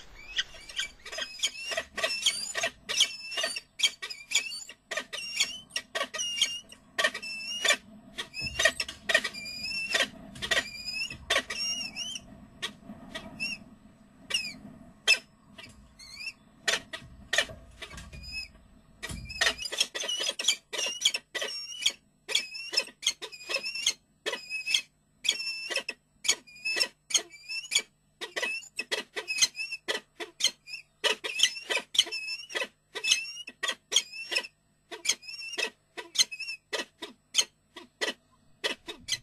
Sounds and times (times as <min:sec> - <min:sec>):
Bird: 0:00.0 - 0:39.2.